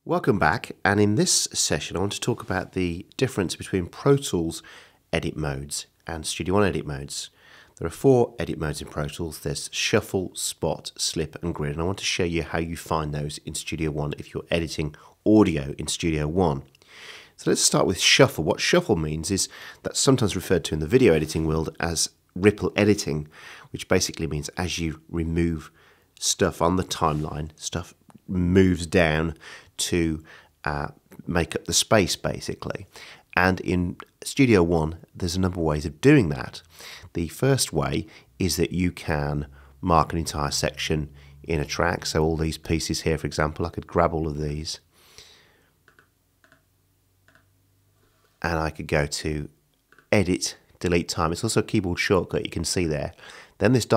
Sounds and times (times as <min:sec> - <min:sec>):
Speech: 0:00.0 - 0:16.7, 0:17.4 - 0:44.9, 0:48.4 - 0:53.9.